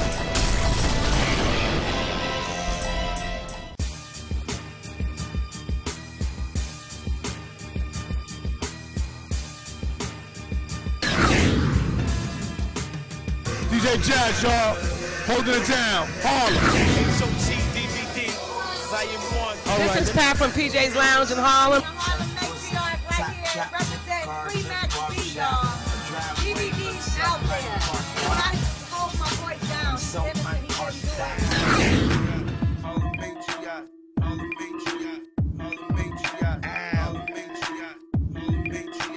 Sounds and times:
Hip hop music: 0:00.0 - 0:00.8, 0:01.6 - 0:39.1
Rapping: 0:13.5 - 0:39.1
Speech: 0:13.6 - 0:18.3, 0:18.9 - 0:31.5.

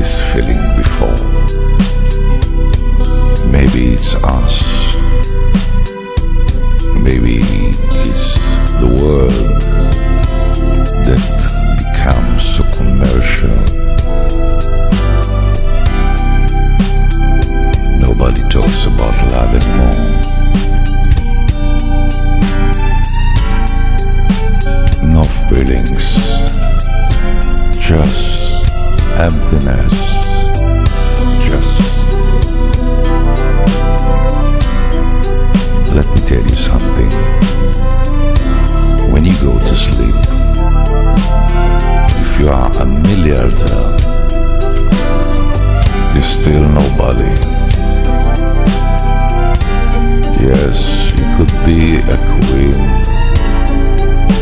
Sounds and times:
Speech: 0:00.0 - 0:01.4, 0:03.4 - 0:05.0, 0:06.9 - 0:09.7, 0:11.0 - 0:13.8, 0:18.0 - 0:20.3, 0:25.0 - 0:26.6, 0:27.8 - 0:30.6, 0:31.4 - 0:32.2, 0:35.9 - 0:37.3, 0:39.1 - 0:40.3, 0:42.1 - 0:44.1, 0:46.0 - 0:47.6, 0:50.3 - 0:53.1.

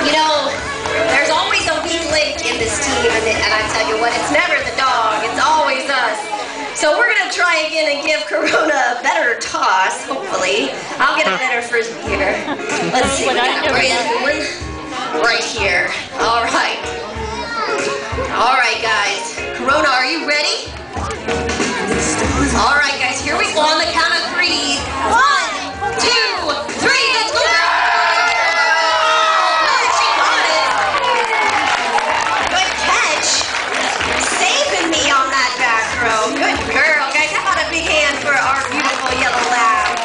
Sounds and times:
Music: 0:00.0 - 0:08.7, 0:09.3 - 0:40.0.

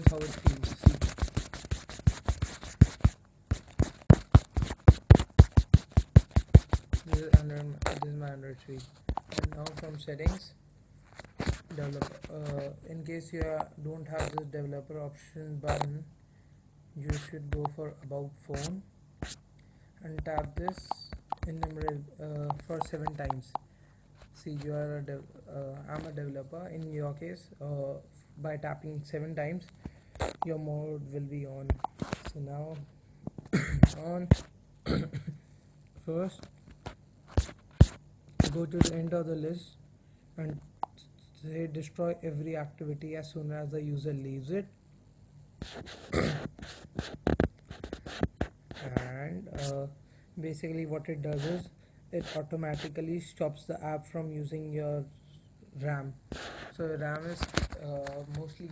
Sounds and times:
Speech: 0:00.0 - 0:01.1, 0:07.0 - 0:10.6, 0:11.7 - 0:16.1, 0:17.0 - 0:18.9, 0:20.0 - 0:23.6, 0:24.4 - 0:29.7, 0:30.4 - 0:32.9, 0:33.9 - 0:35.3, 0:36.0 - 0:36.5, 0:38.4 - 0:39.8, 0:40.4 - 0:40.7, 0:41.4 - 0:44.8, 0:48.8 - 0:58.7.

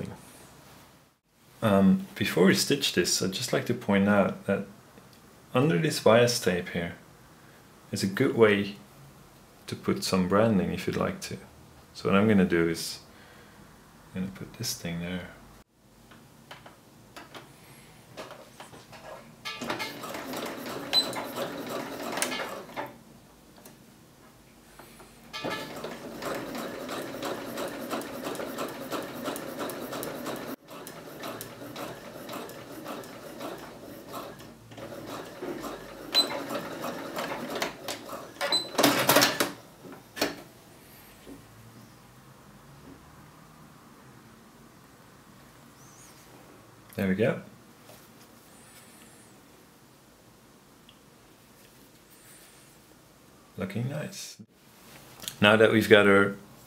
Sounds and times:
Sewing machine: 0:19.5 - 0:23.0, 0:25.4 - 0:39.6.

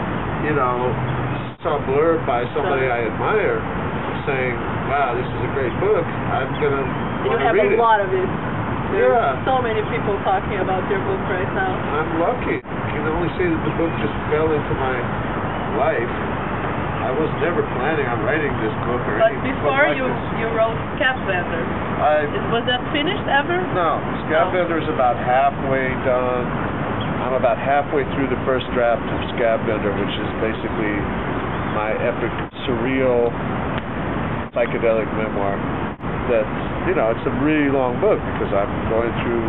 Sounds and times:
Speech: 0:00.4 - 0:03.6, 0:04.2 - 0:08.3, 0:08.9 - 0:15.1, 0:15.7 - 0:16.1, 0:17.0 - 0:26.5, 0:27.2 - 0:31.0, 0:31.8 - 0:33.3, 0:34.6 - 0:35.6, 0:36.3 - 0:39.4.

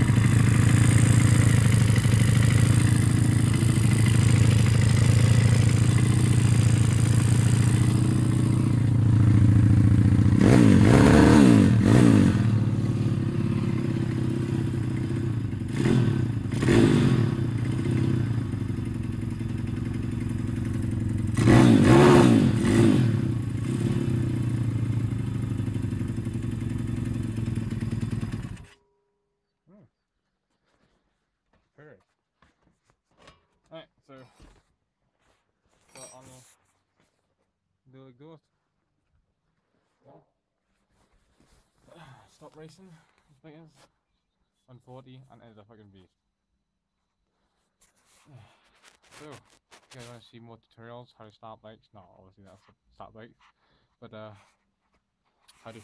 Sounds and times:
Motorcycle: 0:00.0 - 0:28.9.

